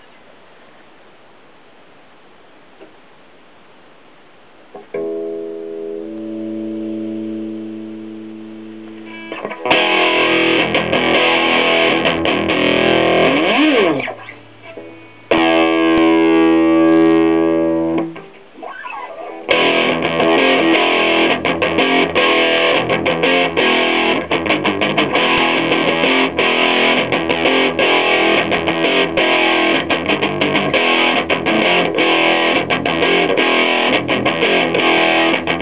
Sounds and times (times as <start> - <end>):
Electric guitar: 4.8 - 35.6.